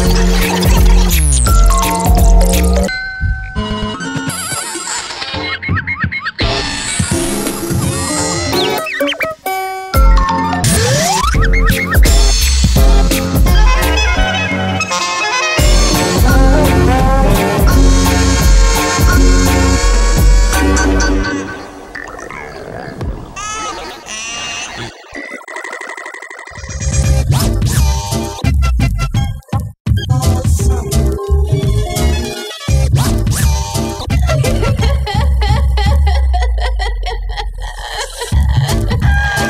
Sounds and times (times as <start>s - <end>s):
Music: 0.0s - 21.9s, 26.8s - 36.3s, 38.3s - 39.5s.